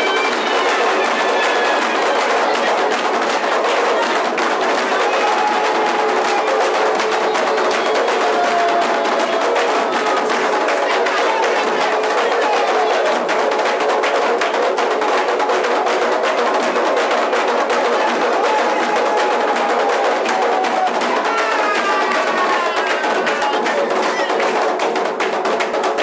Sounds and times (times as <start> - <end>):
Music: 0.0 - 26.0.